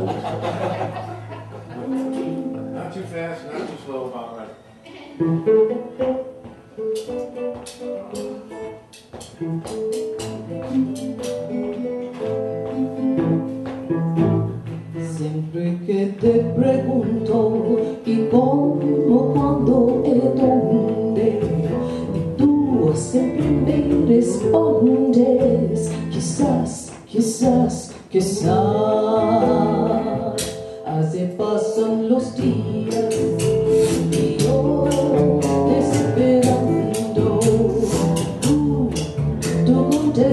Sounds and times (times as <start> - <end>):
Music: 0.0 - 3.4, 4.7 - 40.3.